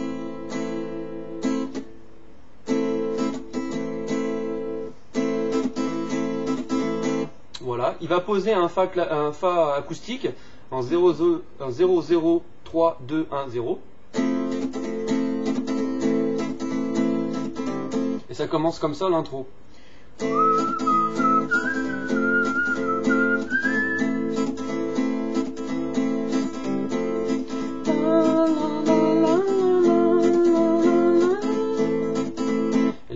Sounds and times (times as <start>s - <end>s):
Acoustic guitar: 0.0s - 7.6s, 14.0s - 18.8s, 19.7s - 33.1s
Speech: 7.6s - 13.9s, 18.3s - 19.5s
Strum: 20.2s - 33.1s.